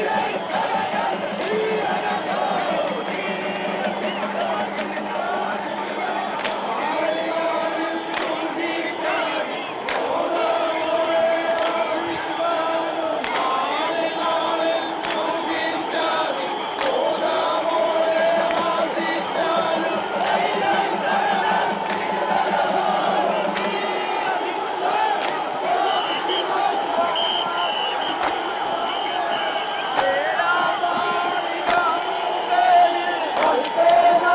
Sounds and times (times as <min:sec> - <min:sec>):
Music: 0:00.0 - 0:34.3.